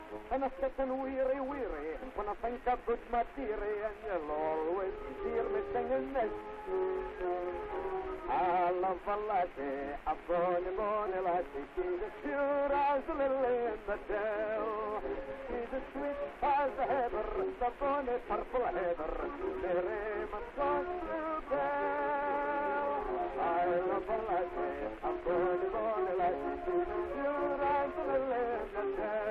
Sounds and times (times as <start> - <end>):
Funny music: 0.0 - 29.3.